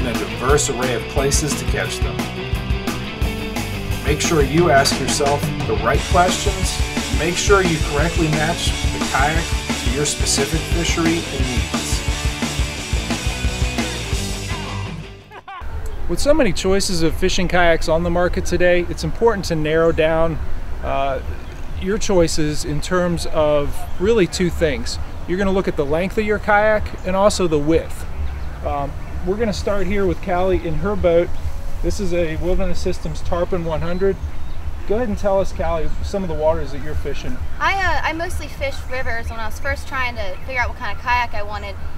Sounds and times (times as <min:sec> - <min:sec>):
Speech: 0:00.0 - 0:02.2, 0:04.1 - 0:12.0, 0:16.1 - 0:28.0, 0:28.7 - 0:31.3, 0:34.9 - 0:41.8
Music: 0:00.0 - 0:15.4.